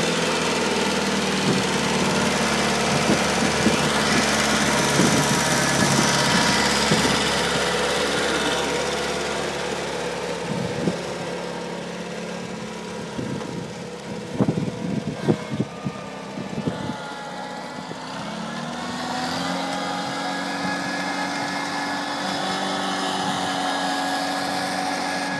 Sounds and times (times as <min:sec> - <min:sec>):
Idling: 0:00.0 - 0:25.3
Outside, rural or natural: 0:00.0 - 0:25.3
Vehicle: 0:00.0 - 0:25.3.